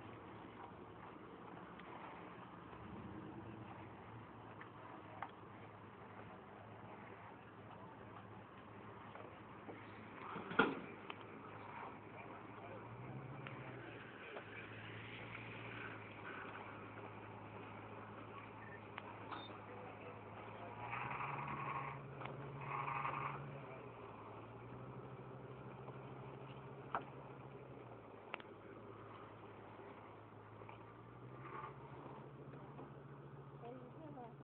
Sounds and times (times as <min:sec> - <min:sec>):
Truck: 0:00.0 - 0:34.4.